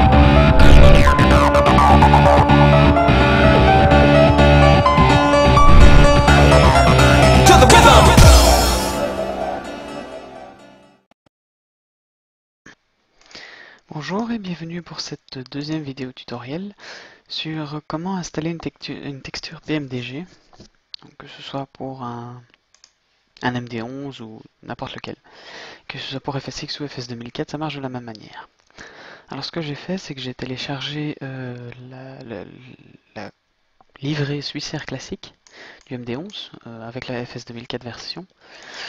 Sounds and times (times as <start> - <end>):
Speech: 7.5 - 8.2, 13.9 - 20.4, 21.0 - 22.6, 23.4 - 25.2, 25.9 - 28.5, 29.3 - 38.3.